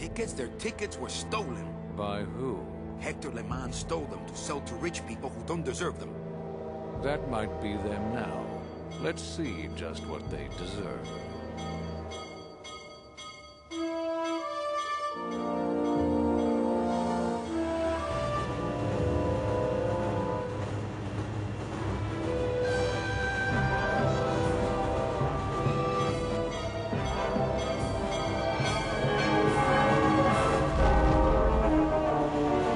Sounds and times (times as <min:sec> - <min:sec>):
Music: 0:00.0 - 0:32.7.